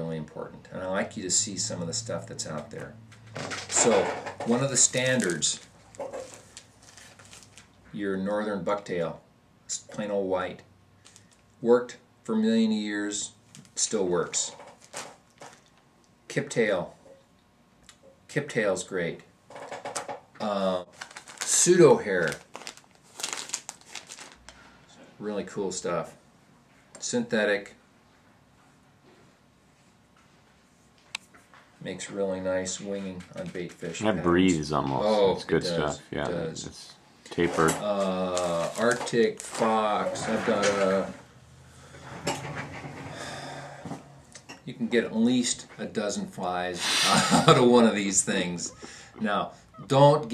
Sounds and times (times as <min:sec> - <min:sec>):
Speech: 0:00.0 - 0:03.0, 0:03.7 - 0:05.6, 0:07.9 - 0:10.7, 0:11.6 - 0:14.6, 0:16.3 - 0:17.0, 0:18.3 - 0:19.3, 0:21.5 - 0:22.4, 0:25.0 - 0:26.2, 0:27.0 - 0:27.8, 0:31.8 - 0:41.2, 0:44.7 - 0:46.8, 0:47.5 - 0:50.3.